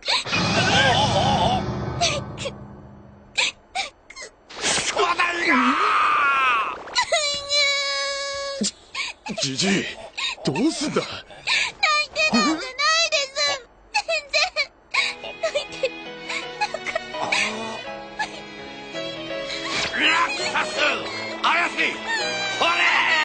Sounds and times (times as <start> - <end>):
Music: 15.1 - 23.2.